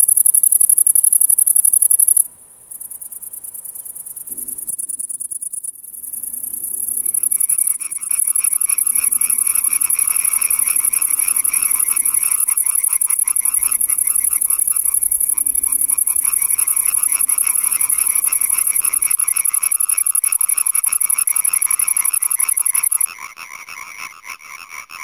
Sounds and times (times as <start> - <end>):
Frog: 0.0 - 3.2, 4.2 - 25.0.